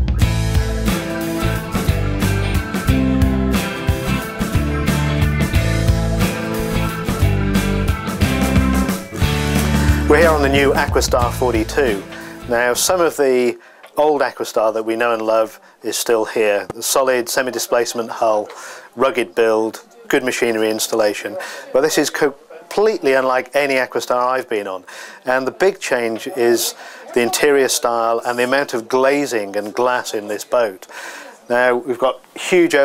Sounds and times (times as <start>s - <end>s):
Speech: 10.1s - 30.9s, 31.5s - 32.8s.